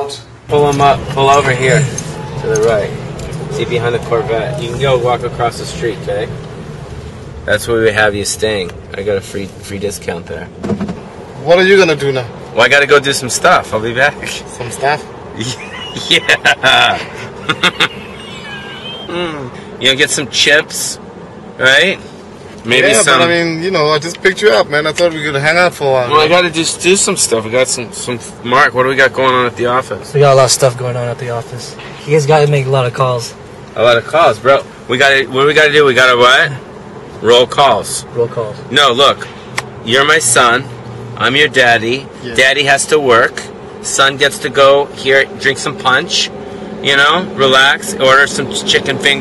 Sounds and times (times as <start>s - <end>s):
Outside, urban or manmade: 0.0s - 49.2s.